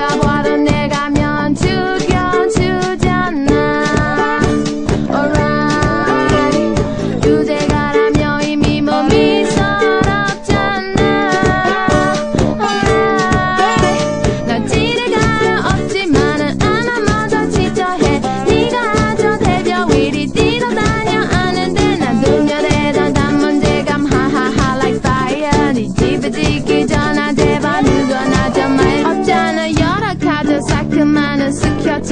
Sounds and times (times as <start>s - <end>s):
Guitar: 0.0s - 32.1s
House music: 3.1s - 32.1s.